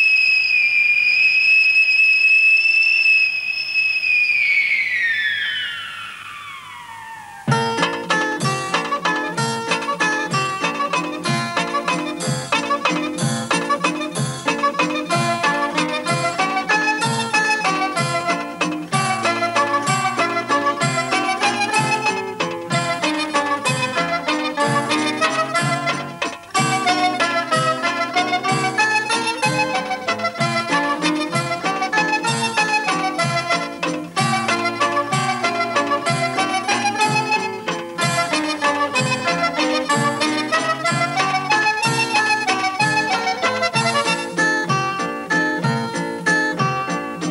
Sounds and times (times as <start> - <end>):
Music: 7.4 - 47.3.